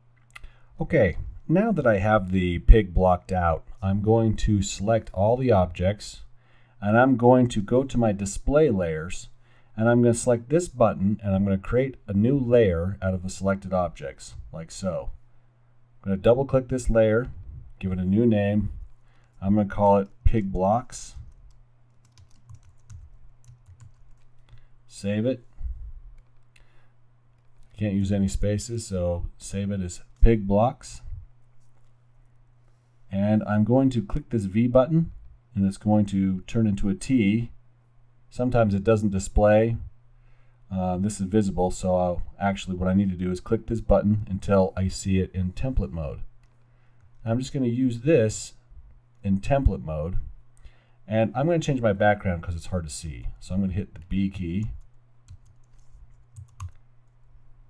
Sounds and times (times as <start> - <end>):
Speech: 0.8 - 15.2, 16.0 - 18.8, 19.4 - 21.3, 24.9 - 25.5, 27.8 - 31.2, 33.1 - 37.6, 38.3 - 39.9, 40.7 - 46.3, 47.2 - 48.6, 49.2 - 50.3, 51.1 - 54.8.